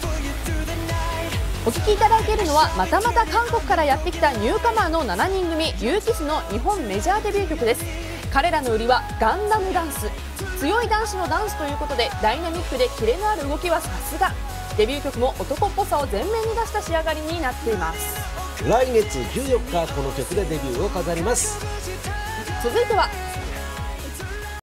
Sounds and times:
Music: 0:00.0 - 0:24.6
Speech: 0:01.7 - 0:21.6, 0:22.4 - 0:23.3.

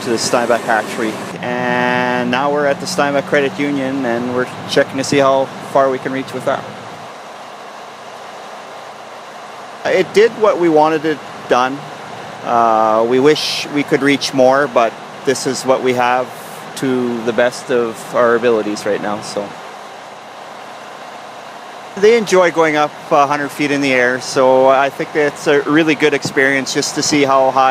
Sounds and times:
Speech: 0:00.0 - 0:06.8, 0:09.8 - 0:11.8, 0:12.4 - 0:19.6, 0:22.0 - 0:27.7.

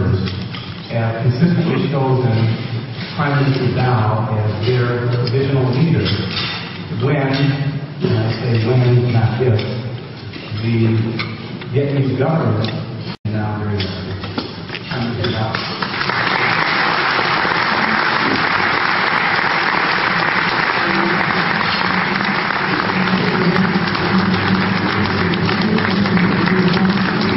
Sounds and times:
Male speech, man speaking: 0:00.0 - 0:00.3, 0:00.9 - 0:02.6, 0:03.2 - 0:06.3, 0:07.0 - 0:09.9, 0:10.5 - 0:14.2, 0:14.9 - 0:15.7
Narration, monologue: 0:00.0 - 0:15.8.

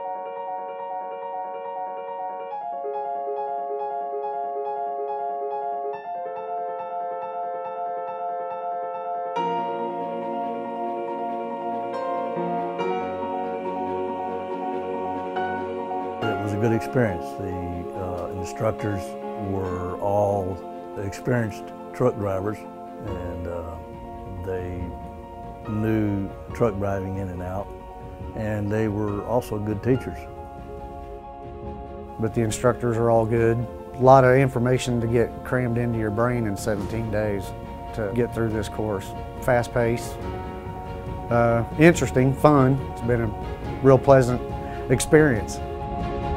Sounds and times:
Music: 0:00.0 - 0:46.3
Speech: 0:16.2 - 0:25.0, 0:25.7 - 0:27.7, 0:28.4 - 0:30.3, 0:32.2 - 0:40.2, 0:41.3 - 0:45.6.

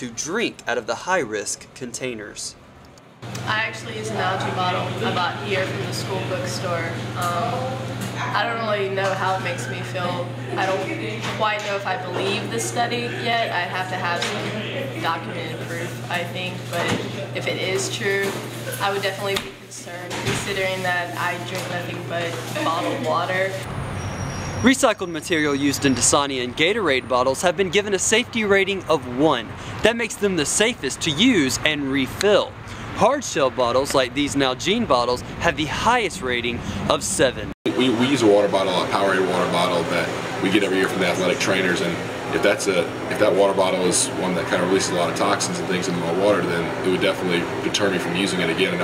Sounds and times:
Speech: 0:03.5 - 0:23.7, 0:24.6 - 0:48.8.

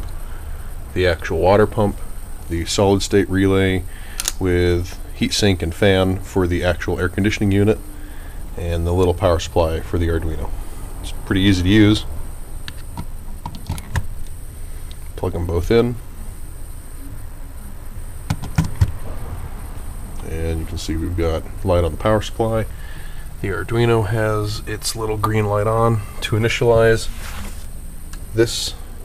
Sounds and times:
Speech: 0:01.0 - 0:07.8, 0:08.6 - 0:12.1, 0:15.2 - 0:16.0, 0:20.2 - 0:22.7, 0:23.4 - 0:27.2, 0:28.4 - 0:28.8.

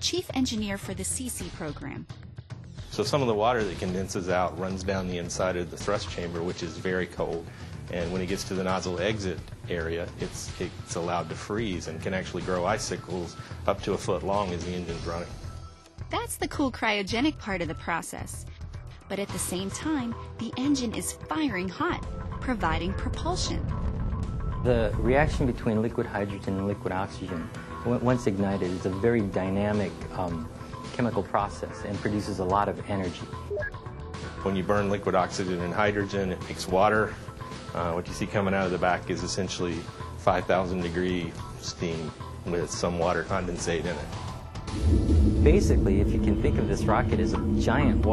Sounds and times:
Speech: 0:00.0 - 0:02.0, 0:03.0 - 0:15.3, 0:16.1 - 0:18.4, 0:19.1 - 0:23.6, 0:24.7 - 0:33.3, 0:34.4 - 0:44.1, 0:45.4 - 0:48.1
Music: 0:00.0 - 0:48.1.

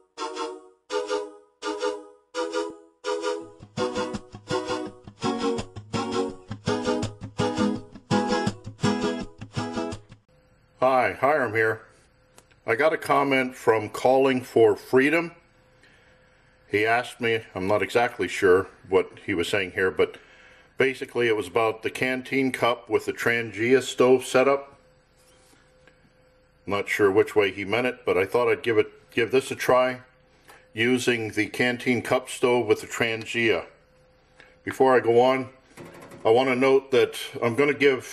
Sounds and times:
Speech: 0:10.8 - 0:11.9, 0:12.6 - 0:15.4, 0:16.7 - 0:20.2, 0:20.8 - 0:24.8, 0:26.6 - 0:30.1, 0:30.8 - 0:33.8, 0:34.7 - 0:35.6, 0:36.2 - 0:38.1.

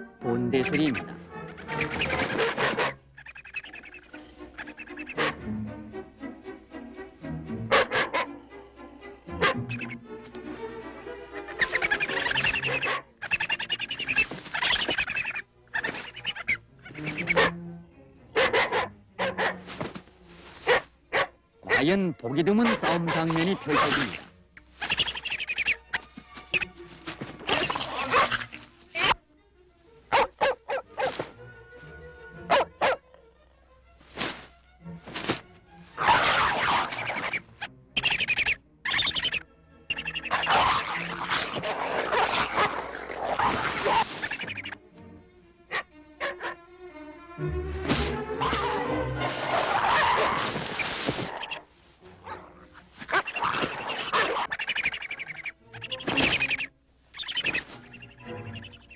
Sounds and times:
Music: 0:00.0 - 0:58.9
Bow-wow: 0:02.3 - 0:03.0, 0:07.7 - 0:08.3, 0:09.4 - 0:09.6, 0:12.6 - 0:13.1, 0:17.4 - 0:17.6, 0:18.4 - 0:19.6, 0:20.7 - 0:21.8, 0:27.9 - 0:28.5, 0:30.1 - 0:31.2, 0:32.5 - 0:33.0, 0:36.0 - 0:37.1, 0:40.3 - 0:44.0, 0:45.7 - 0:46.6, 0:49.5 - 0:50.4, 0:52.2 - 0:52.5, 0:53.1 - 0:54.5.

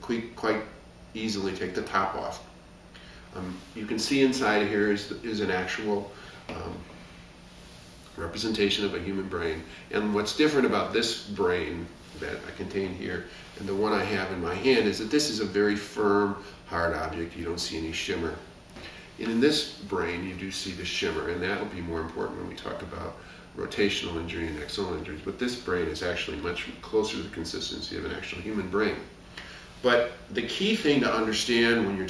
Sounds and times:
Speech: 0:00.0 - 0:02.5, 0:03.3 - 0:06.9, 0:08.1 - 0:18.5, 0:19.2 - 0:29.2, 0:29.8 - 0:32.0
Inside, small room: 0:00.0 - 0:32.0.

